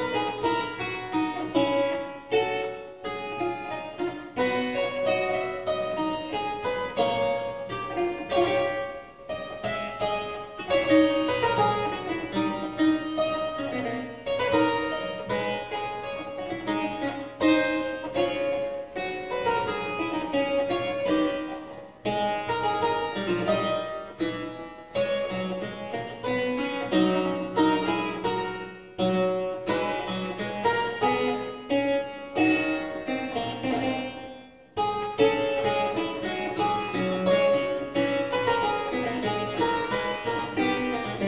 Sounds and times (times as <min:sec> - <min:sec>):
Harpsichord: 0:00.0 - 0:41.2.